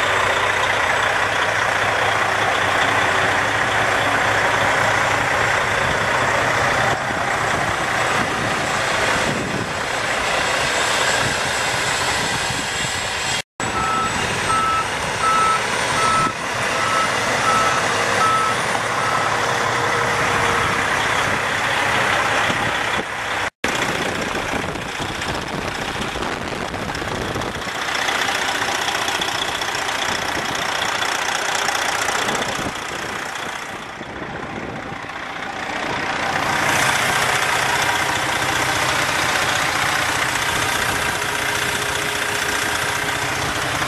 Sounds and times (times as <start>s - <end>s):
Vehicle: 0.0s - 43.8s.